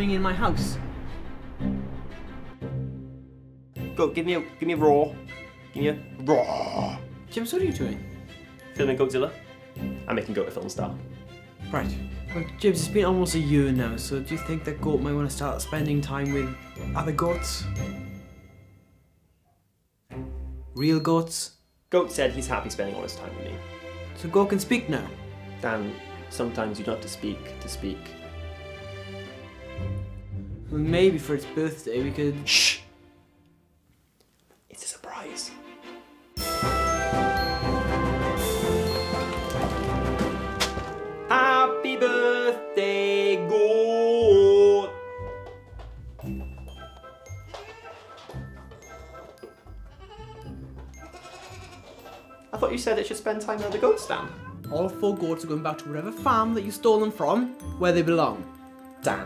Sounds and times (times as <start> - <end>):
Speech: 0.0 - 0.8, 4.0 - 5.2, 5.8 - 8.0, 8.8 - 9.4, 10.1 - 11.0, 11.7 - 17.7, 20.8 - 23.6, 24.2 - 28.1, 30.7 - 32.9, 52.5 - 58.4, 59.0 - 59.2
Music: 0.0 - 19.4, 20.1 - 33.8, 34.8 - 59.2.